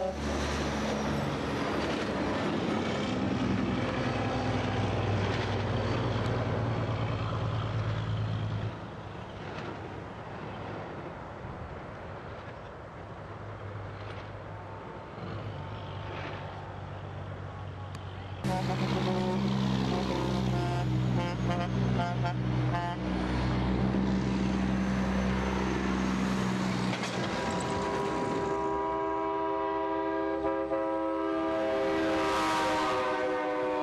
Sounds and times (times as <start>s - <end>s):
Truck: 0.0s - 10.6s, 12.2s - 33.7s.